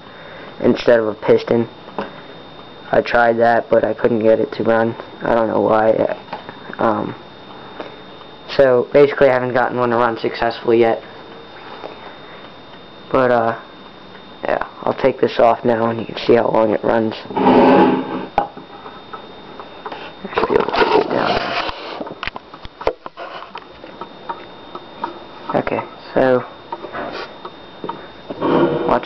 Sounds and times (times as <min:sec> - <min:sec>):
Speech: 0:00.6 - 0:01.7, 0:02.9 - 0:06.2, 0:06.8 - 0:07.2, 0:08.5 - 0:11.0, 0:13.1 - 0:13.6, 0:14.4 - 0:17.3, 0:25.5 - 0:26.5.